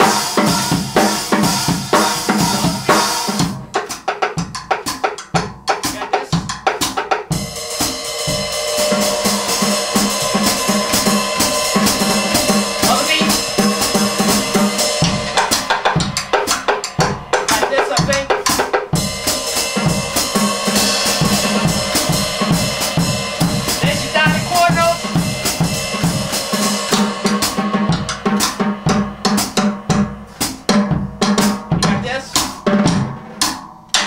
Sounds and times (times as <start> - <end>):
Drum: 0.0 - 34.0
Drum kit: 0.0 - 34.0
Jazz: 0.0 - 34.0
Speech: 5.9 - 6.5, 12.8 - 13.4, 17.5 - 18.4, 23.8 - 25.0, 31.8 - 32.4
Inside, large room or hall: 7.5 - 17.5.